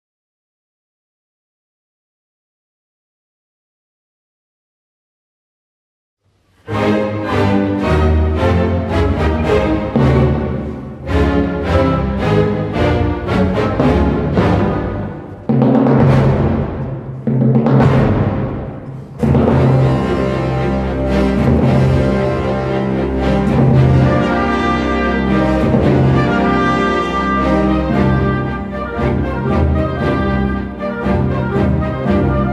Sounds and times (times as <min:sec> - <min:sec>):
Orchestra: 0:06.4 - 0:32.5
Timpani: 0:06.5 - 0:32.5.